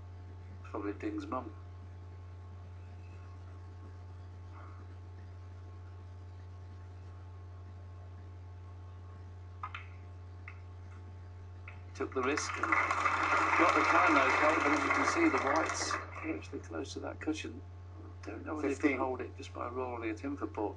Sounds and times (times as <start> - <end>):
Speech: 0.7 - 1.6, 12.0 - 12.8, 13.4 - 17.6, 18.2 - 20.7.